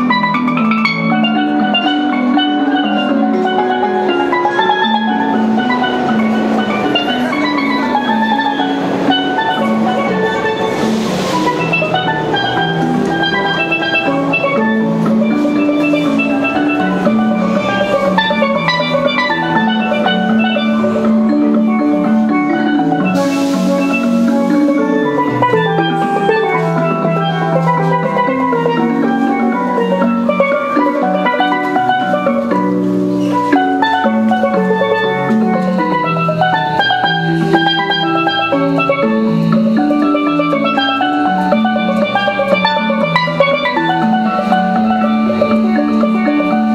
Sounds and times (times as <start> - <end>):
Steelpan: 0.0 - 46.7.